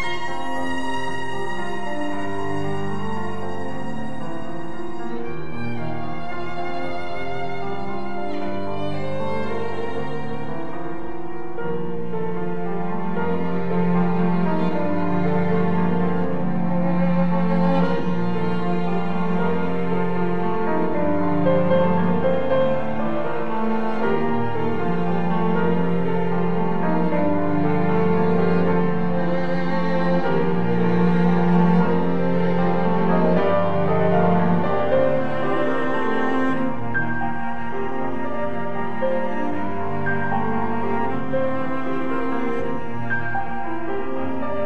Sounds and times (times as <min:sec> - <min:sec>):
Violin, fiddle: 0:00.0 - 0:44.6.